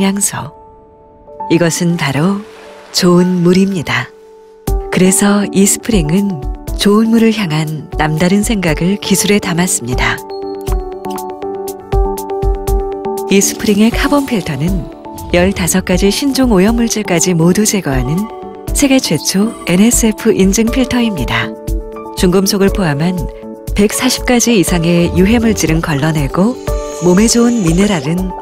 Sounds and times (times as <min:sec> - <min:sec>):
Speech: 0:00.0 - 0:00.6, 0:01.5 - 0:02.4, 0:03.0 - 0:04.1, 0:05.0 - 0:10.2, 0:13.3 - 0:21.6, 0:22.2 - 0:28.4
Music: 0:00.0 - 0:28.4.